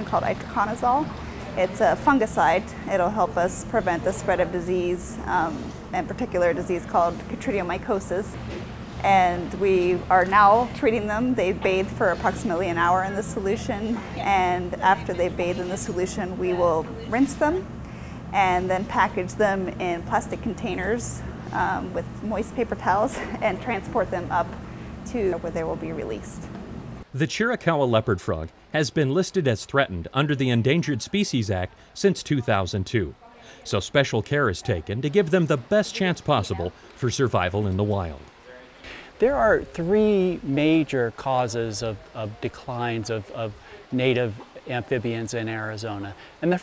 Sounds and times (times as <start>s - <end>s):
Speech: 0.0s - 8.3s, 9.0s - 17.6s, 18.4s - 26.4s, 27.2s - 46.6s.